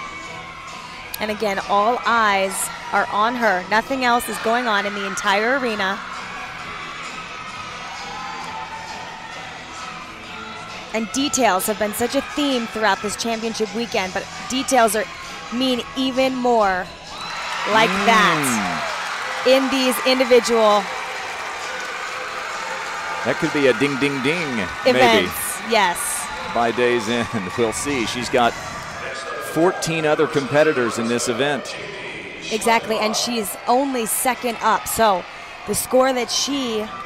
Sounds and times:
Music: 0.0 - 37.0
Speech: 17.7 - 18.8, 23.3 - 28.5, 29.4 - 31.7, 32.5 - 36.9.

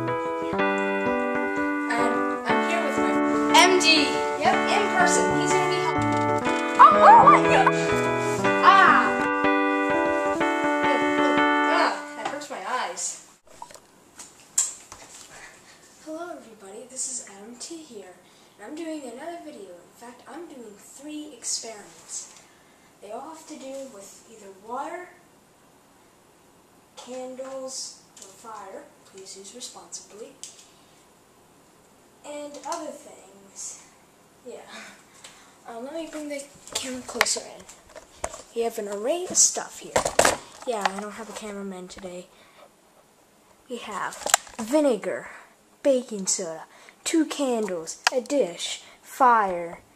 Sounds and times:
Music: 0.0 - 12.6
Speech: 11.7 - 13.2, 16.0 - 22.3, 23.0 - 25.2, 27.0 - 30.4, 32.2 - 35.0, 35.6 - 37.7, 38.5 - 40.0, 40.6 - 42.3, 43.7 - 49.9.

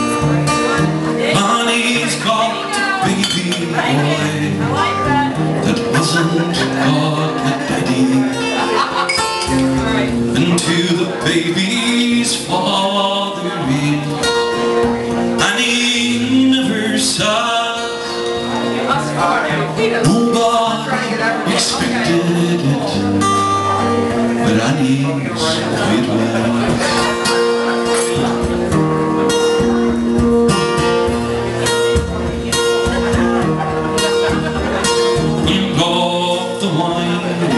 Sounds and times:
Speech: 0.0 - 30.1, 31.2 - 37.5
Music: 0.0 - 37.5.

